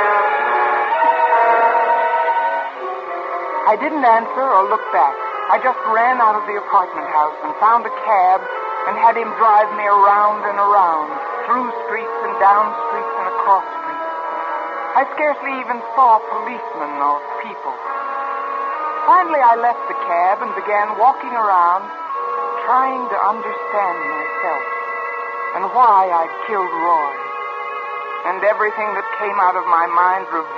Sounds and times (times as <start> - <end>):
Music: 0.0 - 30.5
Speech: 3.7 - 13.6, 15.0 - 17.8, 19.1 - 21.9, 22.6 - 24.6, 25.6 - 27.2, 28.3 - 30.5
Radio: 3.7 - 14.0, 15.0 - 17.8, 19.1 - 21.9, 22.6 - 24.6, 25.6 - 27.2, 28.2 - 30.5.